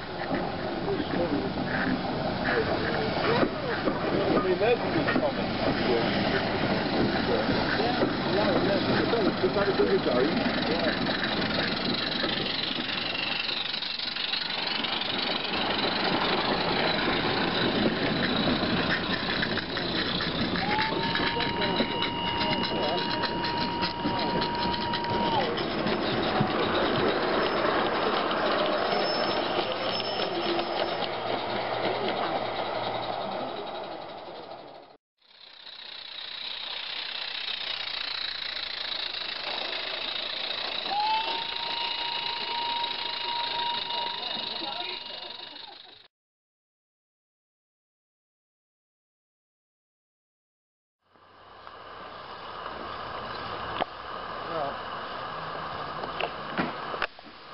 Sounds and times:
Railroad car, train wagon: 0:00.0 - 0:46.1, 0:51.1 - 0:57.5
Train: 0:00.0 - 0:46.1, 0:51.1 - 0:57.5
Rattle: 0:06.2 - 0:46.1.

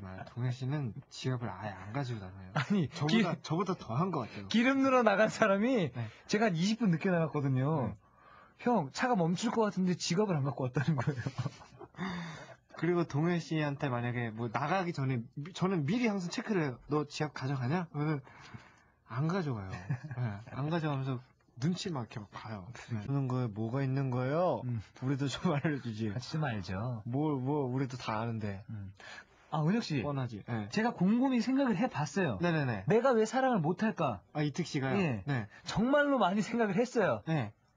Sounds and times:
Speech: 0:00.0 - 0:08.0, 0:08.6 - 0:11.4, 0:12.7 - 0:18.3, 0:19.1 - 0:37.6.

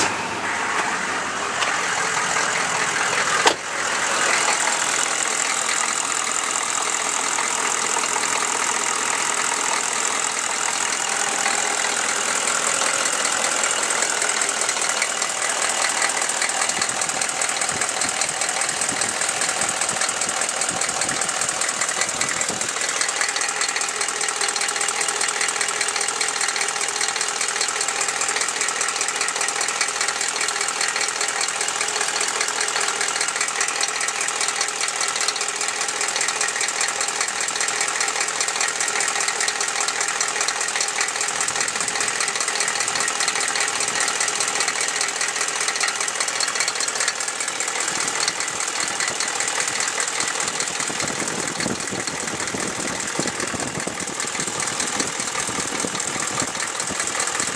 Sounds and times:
Engine: 0:00.0 - 0:57.5
Vehicle: 0:00.0 - 0:57.5.

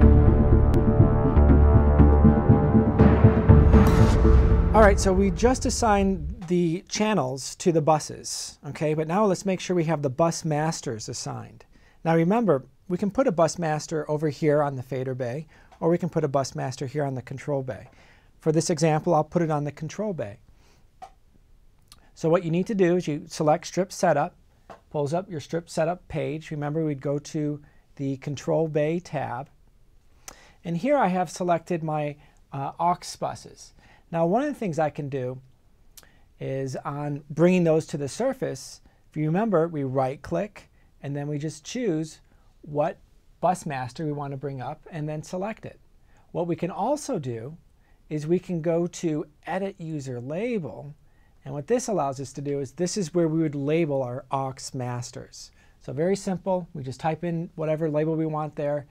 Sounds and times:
Speech: 0:04.7 - 0:20.4, 0:22.2 - 0:29.5, 0:30.6 - 0:35.5, 0:36.4 - 0:58.9.

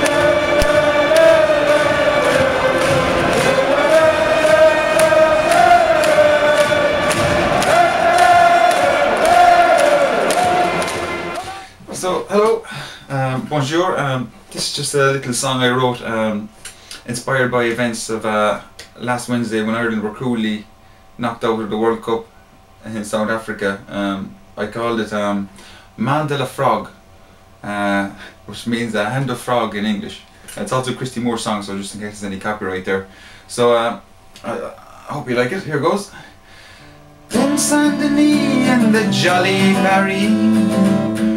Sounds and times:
Music: 0:00.0 - 0:11.7, 0:36.8 - 0:41.3
Speech: 0:11.4 - 0:27.0, 0:27.6 - 0:36.3.

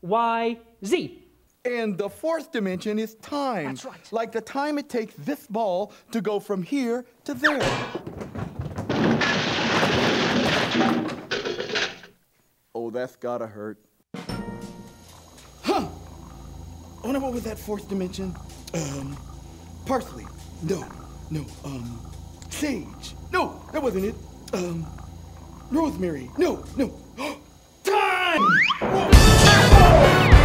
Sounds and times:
Speech: 0:00.0 - 0:07.6, 0:12.8 - 0:13.8, 0:17.0 - 0:19.2, 0:19.8 - 0:24.9, 0:25.7 - 0:28.4.

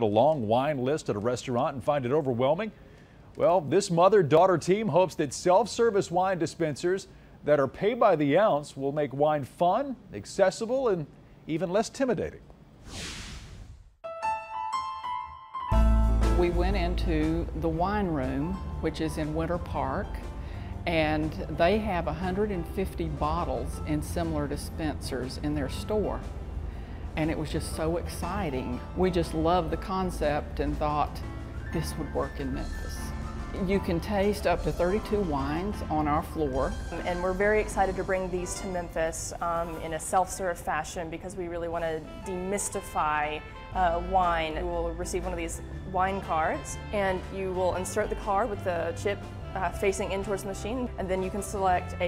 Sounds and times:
Music: 0:14.0 - 0:52.0
Speech: 0:31.8 - 0:52.0.

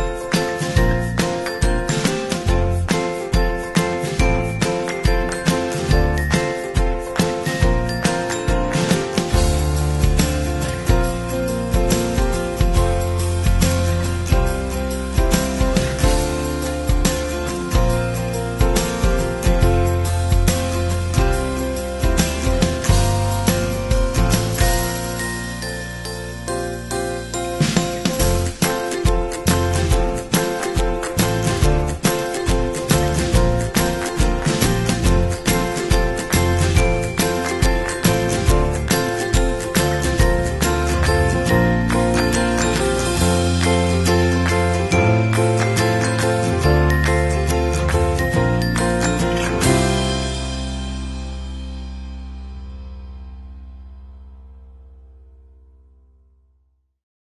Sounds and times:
Music: 0:00.0 - 0:56.8.

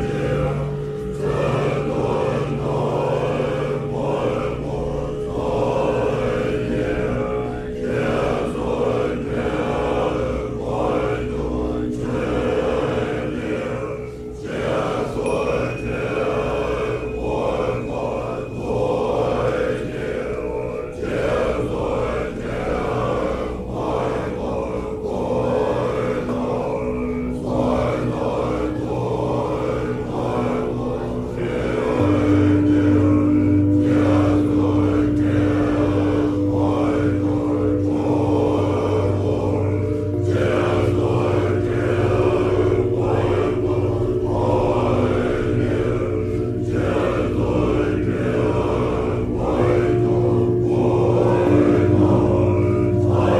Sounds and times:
Mantra: 0:00.0 - 0:53.3.

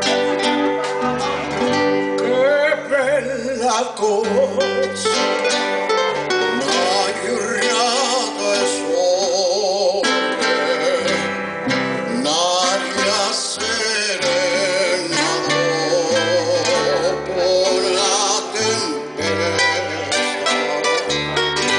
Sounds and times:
Music: 0:00.0 - 0:21.7
Male singing: 0:02.2 - 0:05.2, 0:06.5 - 0:11.4, 0:12.1 - 0:20.5.

